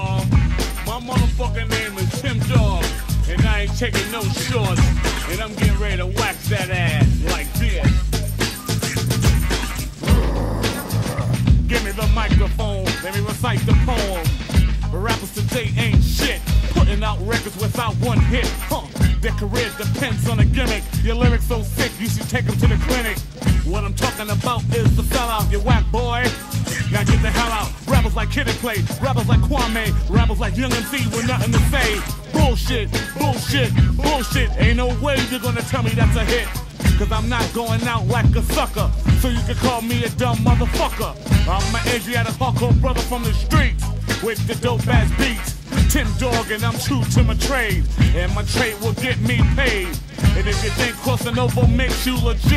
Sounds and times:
Music: 0.0s - 52.5s.

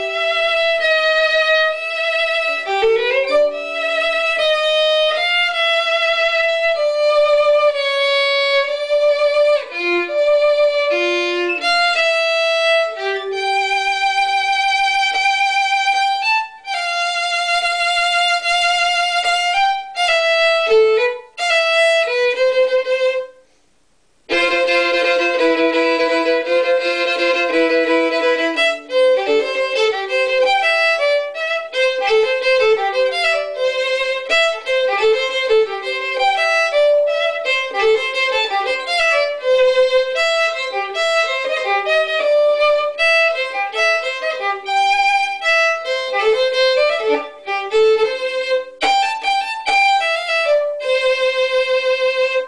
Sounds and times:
Violin, fiddle: 0.0s - 23.5s, 24.3s - 52.4s.

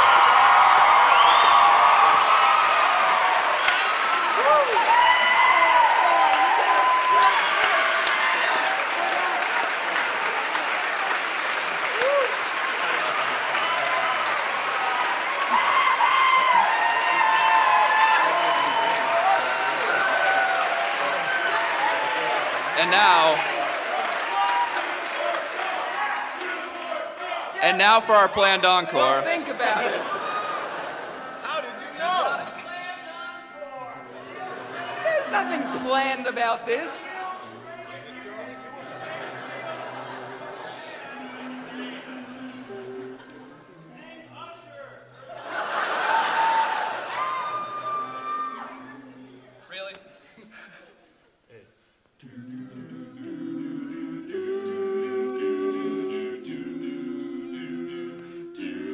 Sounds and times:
Applause: 0.0s - 27.1s.

